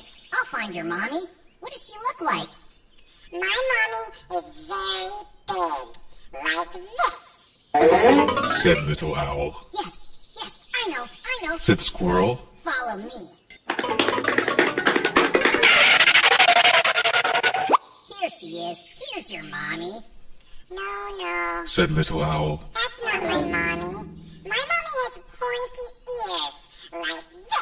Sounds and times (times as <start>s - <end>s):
Speech: 0.4s - 2.6s, 3.3s - 13.4s, 18.1s - 20.1s, 20.7s - 27.6s.